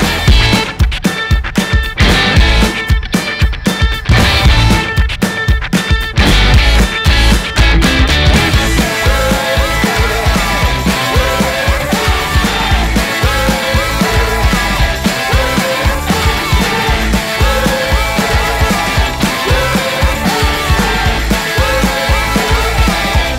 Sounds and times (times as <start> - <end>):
Music: 0.0 - 23.3.